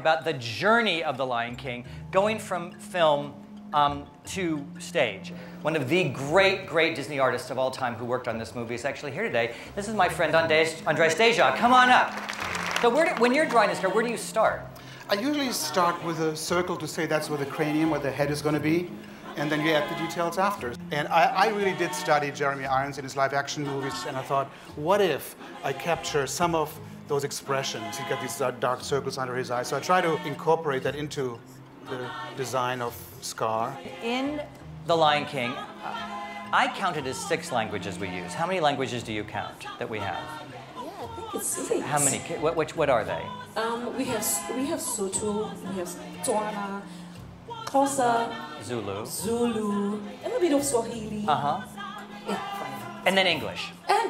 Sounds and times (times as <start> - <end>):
Music: 0.0 - 54.1.